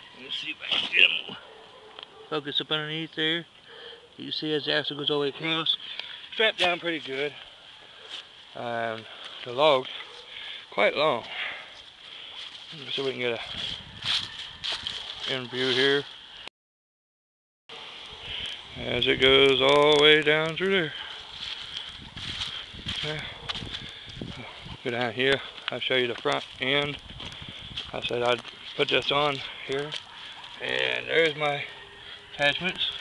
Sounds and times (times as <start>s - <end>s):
Speech: 0.2s - 1.4s, 2.3s - 3.5s, 4.2s - 5.8s, 6.4s - 7.4s, 8.6s - 10.0s, 10.7s - 11.3s, 12.7s - 13.6s, 15.3s - 16.1s, 18.8s - 21.0s, 23.0s - 23.4s, 24.4s - 27.0s, 27.9s - 30.0s, 30.6s - 31.7s, 32.4s - 33.0s.